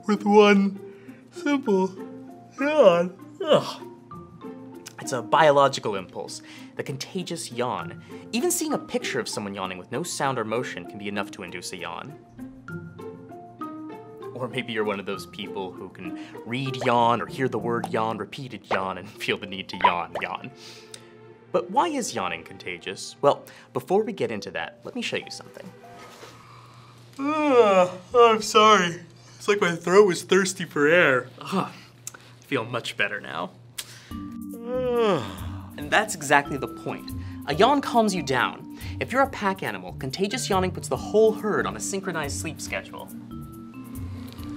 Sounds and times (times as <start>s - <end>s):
Music: 0.0s - 44.5s.